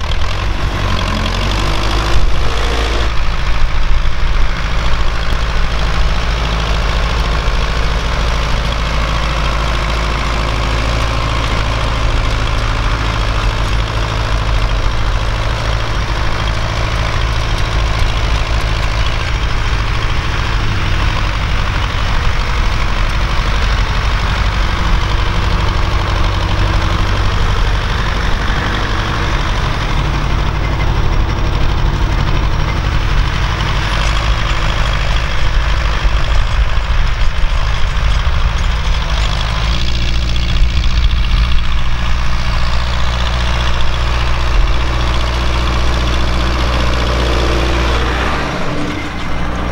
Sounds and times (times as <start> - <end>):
Idling: 0.0 - 49.7
Vehicle: 0.0 - 49.7.